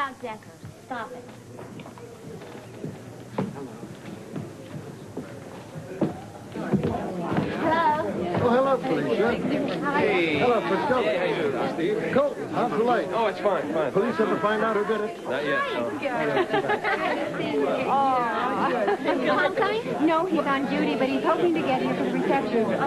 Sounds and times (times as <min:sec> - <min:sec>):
Chatter: 0:00.0 - 0:22.8.